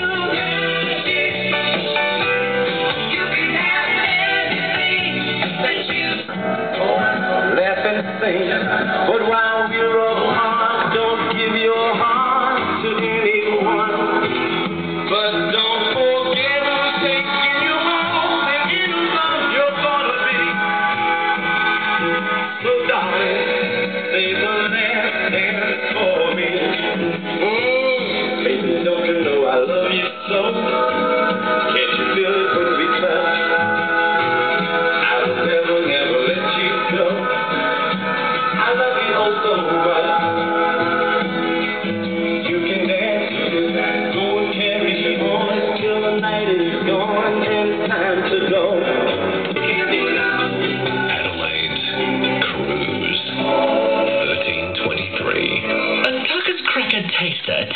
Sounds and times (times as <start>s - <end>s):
Music: 0.0s - 57.7s.